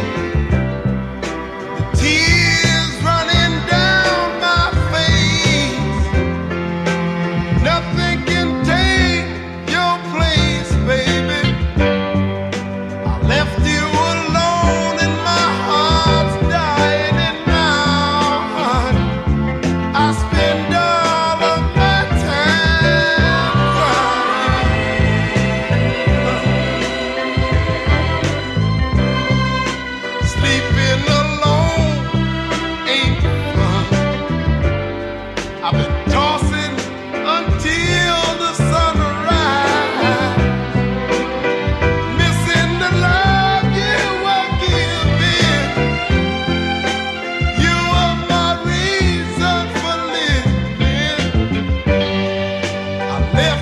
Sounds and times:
Music: 0:00.0 - 0:53.6.

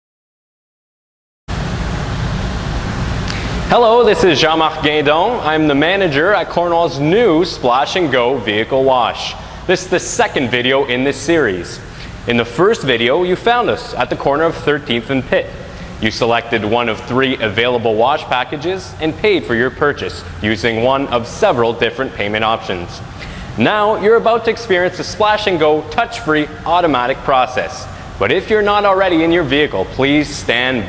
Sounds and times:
Speech: 0:03.7 - 0:23.0, 0:23.6 - 0:30.8.

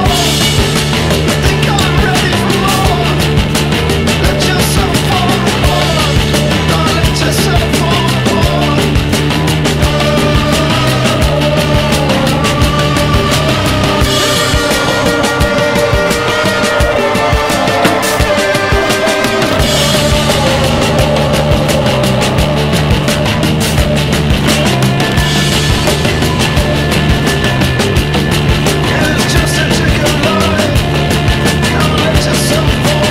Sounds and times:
Angry music: 0:00.0 - 0:33.1.

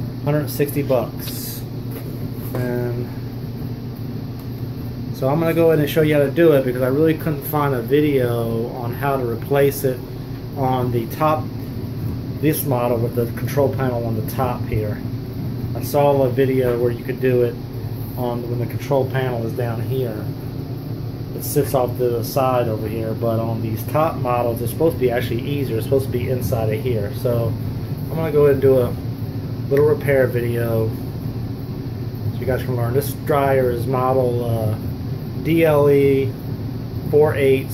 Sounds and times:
Speech: 0:00.2 - 0:01.7, 0:02.5 - 0:03.2, 0:05.2 - 0:10.0, 0:10.6 - 0:11.5, 0:12.4 - 0:15.0, 0:15.8 - 0:17.6, 0:18.2 - 0:20.4, 0:21.4 - 0:29.0, 0:29.7 - 0:31.0, 0:32.4 - 0:34.8, 0:35.4 - 0:36.4, 0:37.1 - 0:37.7.

